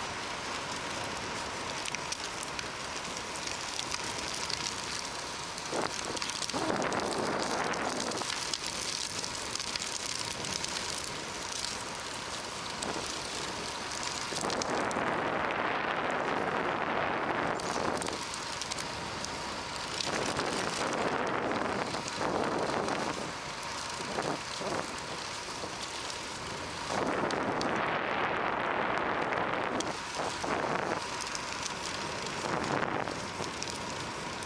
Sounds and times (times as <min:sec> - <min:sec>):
Bicycle: 0:00.0 - 0:34.4.